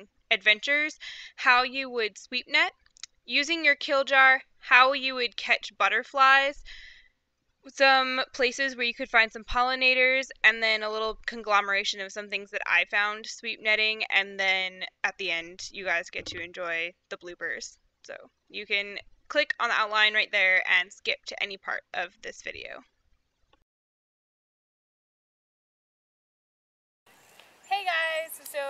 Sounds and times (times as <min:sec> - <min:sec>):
Speech: 0:00.0 - 0:06.6, 0:07.7 - 0:22.8, 0:27.7 - 0:28.6.